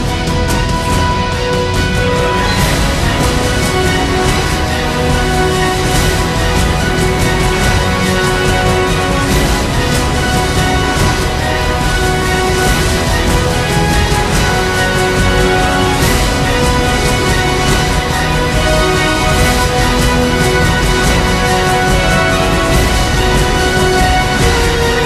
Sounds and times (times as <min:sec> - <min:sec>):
Theme music: 0:00.0 - 0:25.0.